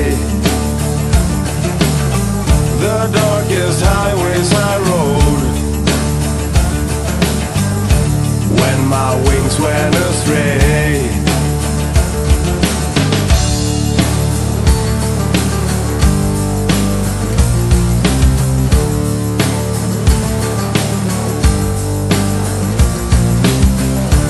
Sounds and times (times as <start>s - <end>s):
Music: 0.0s - 24.2s.